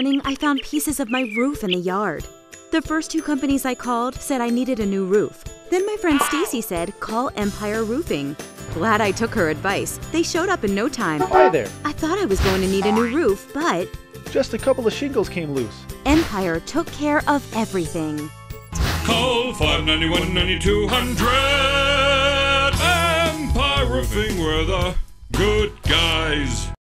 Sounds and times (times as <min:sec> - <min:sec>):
Speech: 0:00.0 - 0:18.3
Music: 0:00.0 - 0:26.8.